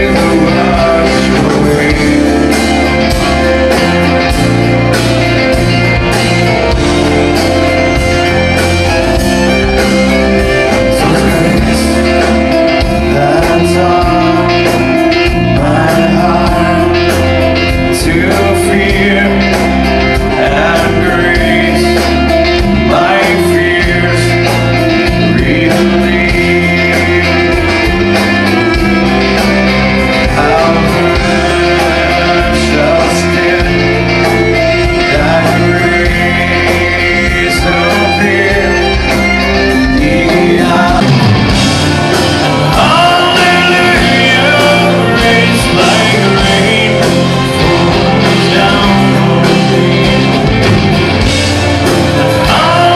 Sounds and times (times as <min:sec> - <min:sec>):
Independent music: 0:00.0 - 0:52.9.